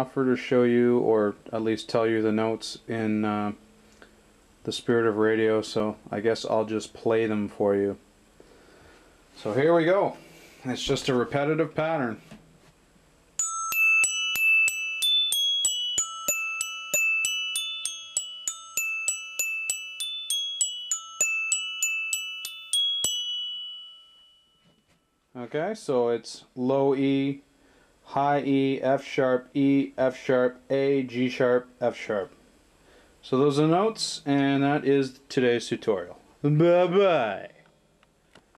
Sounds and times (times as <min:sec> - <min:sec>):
Speech: 0:00.0 - 0:03.6, 0:04.6 - 0:08.0, 0:09.4 - 0:12.3, 0:25.4 - 0:27.4, 0:28.1 - 0:32.4, 0:33.2 - 0:37.6.